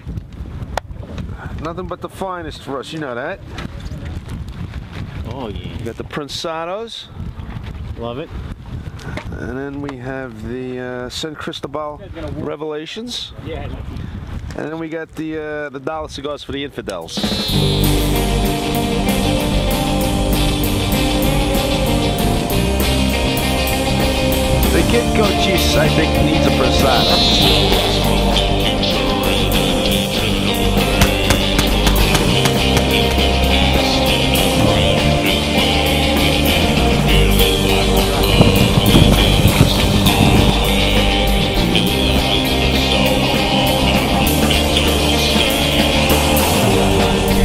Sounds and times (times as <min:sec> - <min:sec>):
Speech: 0:01.5 - 0:04.1, 0:05.3 - 0:07.1, 0:09.4 - 0:13.8, 0:14.6 - 0:17.3, 0:24.7 - 0:27.8
Music: 0:17.2 - 0:47.4.